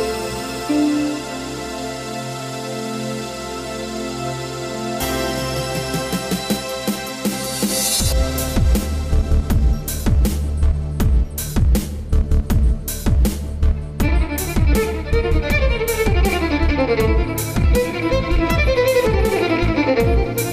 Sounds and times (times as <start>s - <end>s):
Violin, fiddle: 0.0s - 6.4s, 14.0s - 20.5s.